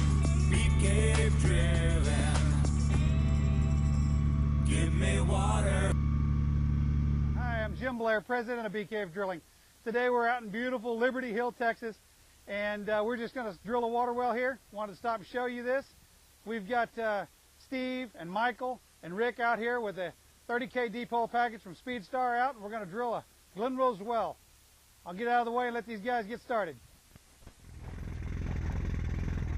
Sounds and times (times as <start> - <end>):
Speech: 7.4 - 24.4, 25.1 - 26.8.